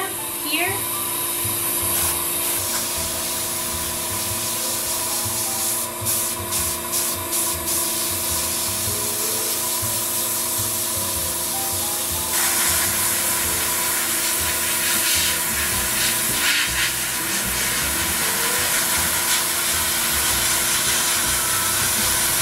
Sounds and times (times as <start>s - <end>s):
Music: 0.0s - 22.4s.